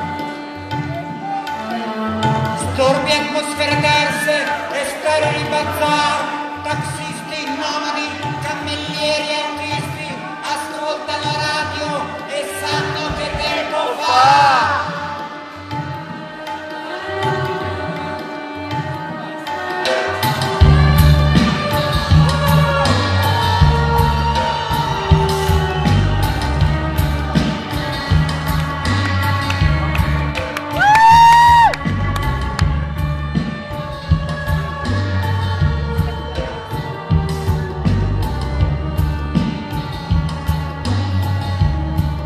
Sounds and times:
Music: 0:00.0 - 0:42.2.

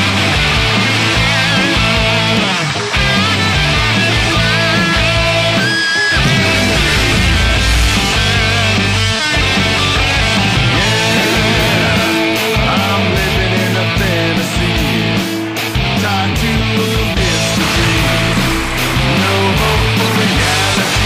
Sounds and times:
Electric guitar: 0:00.0 - 0:21.0.

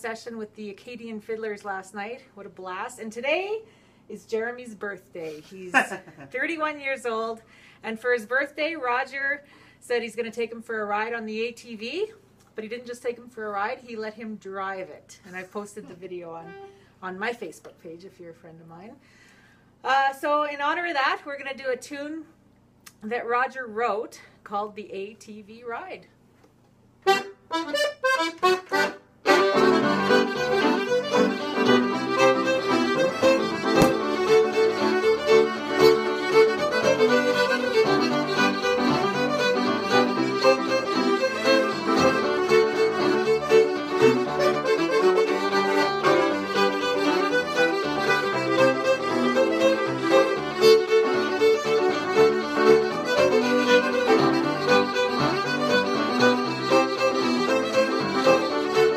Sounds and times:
Speech: 0:00.0 - 0:19.0, 0:19.8 - 0:22.3, 0:22.9 - 0:26.2.

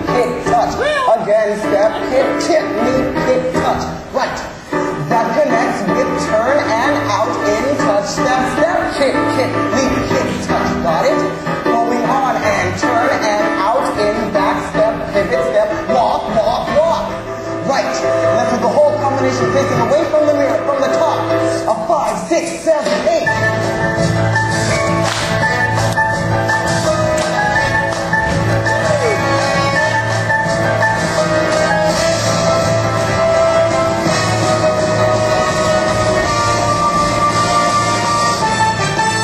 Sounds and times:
Music: 0:00.0 - 0:39.2
Speech: 0:05.1 - 0:23.4.

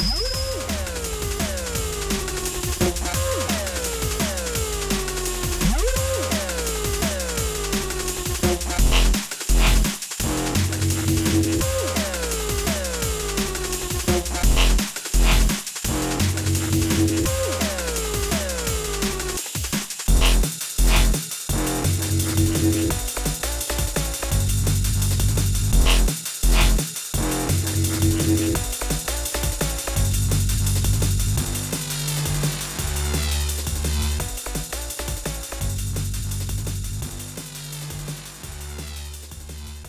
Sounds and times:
Dubstep: 0:00.0 - 0:39.8.

